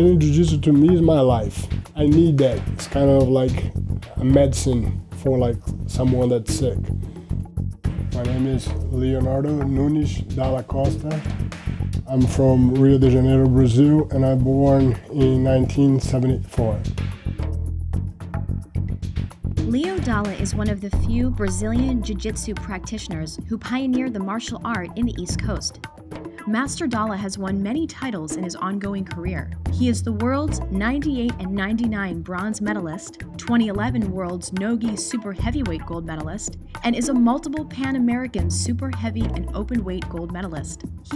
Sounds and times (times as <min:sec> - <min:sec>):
Speech: 0:00.0 - 0:06.9, 0:08.2 - 0:11.3, 0:12.1 - 0:16.9, 0:19.7 - 0:25.8, 0:26.5 - 0:41.1
Music: 0:00.0 - 0:41.1.